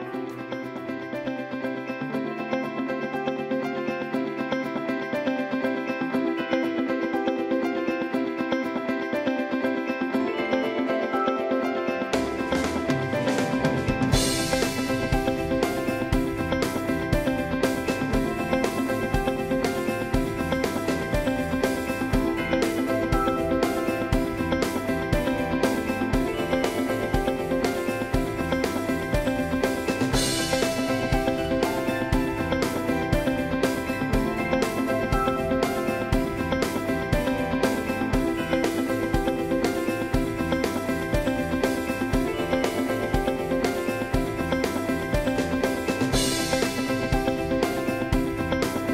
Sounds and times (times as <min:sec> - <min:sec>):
Music: 0:00.0 - 0:48.9.